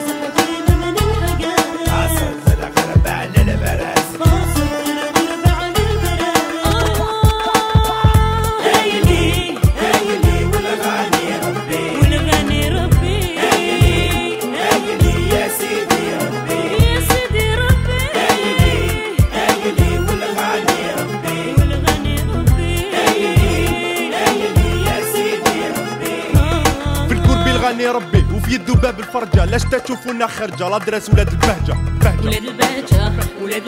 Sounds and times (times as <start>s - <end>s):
Salsa music: 0.0s - 33.6s.